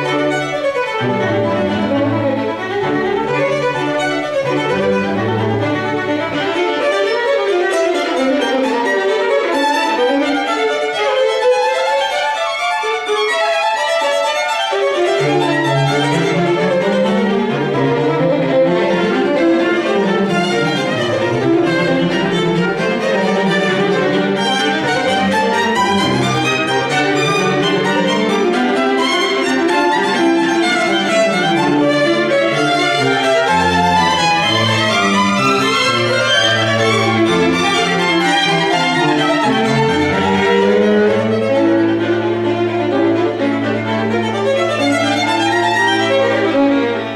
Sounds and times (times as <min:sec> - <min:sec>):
String section: 0:00.0 - 0:47.1.